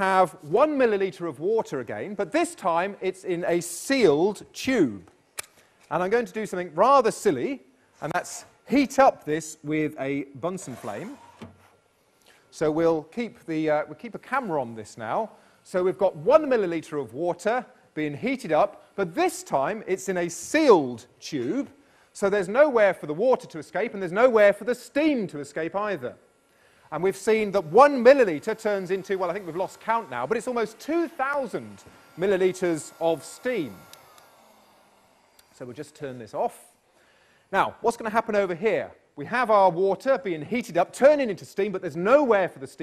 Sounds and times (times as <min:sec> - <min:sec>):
Speech: 0:00.0 - 0:05.1, 0:05.9 - 0:11.2, 0:12.5 - 0:26.2, 0:26.9 - 0:33.8, 0:35.6 - 0:36.8, 0:37.5 - 0:42.8.